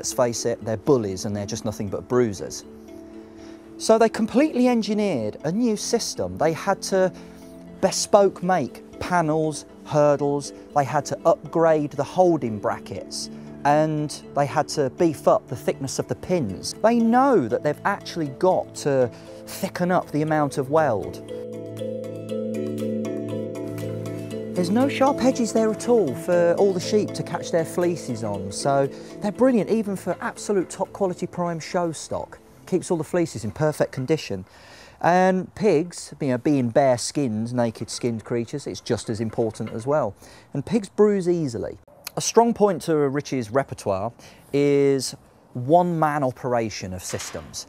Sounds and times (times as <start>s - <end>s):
Speech: 0.0s - 2.7s, 3.8s - 7.1s, 7.8s - 21.2s, 24.6s - 47.6s
Music: 0.0s - 34.4s.